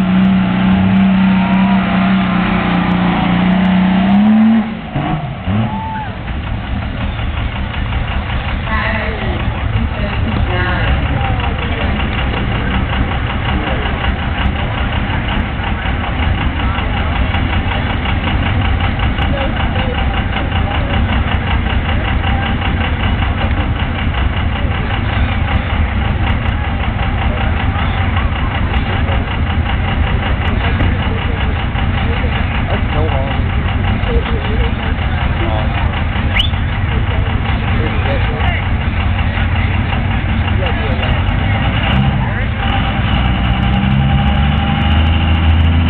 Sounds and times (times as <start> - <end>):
Truck: 0.0 - 45.9
Speech: 8.6 - 43.2.